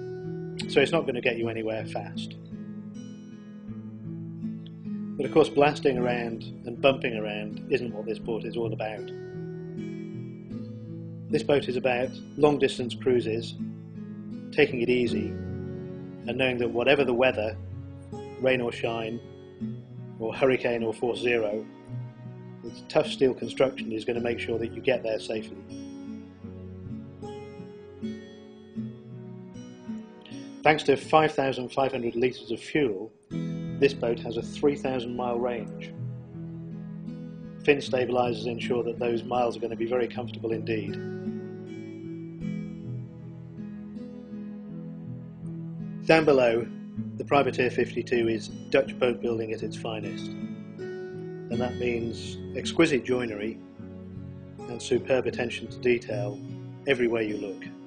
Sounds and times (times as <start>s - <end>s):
Music: 0.0s - 57.8s
Speech: 0.6s - 2.4s, 5.2s - 9.1s, 11.4s - 13.6s, 14.6s - 15.4s, 16.3s - 17.6s, 18.4s - 19.2s, 20.2s - 21.7s, 22.7s - 25.6s, 30.7s - 33.1s, 33.8s - 35.9s, 37.7s - 41.0s, 46.1s - 50.3s, 51.5s - 53.6s, 54.7s - 57.8s.